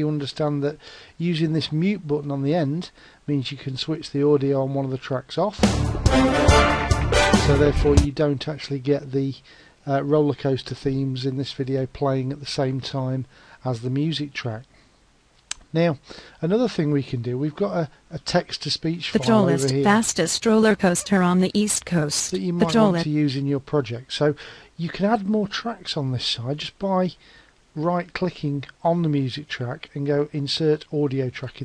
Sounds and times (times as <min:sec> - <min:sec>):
Speech: 0:00.0 - 0:05.6, 0:07.4 - 0:14.7, 0:15.7 - 0:27.2, 0:27.8 - 0:31.6
Music: 0:05.6 - 0:08.1.